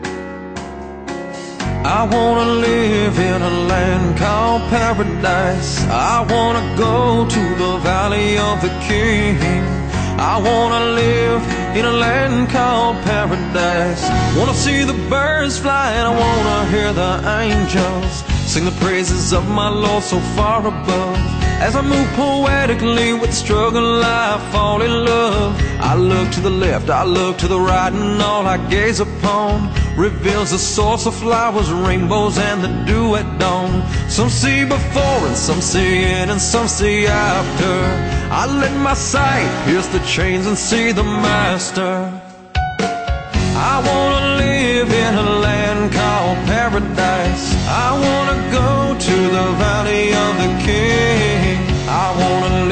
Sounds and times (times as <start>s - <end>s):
Soundtrack music: 0.0s - 52.7s
Bluegrass: 1.7s - 41.9s.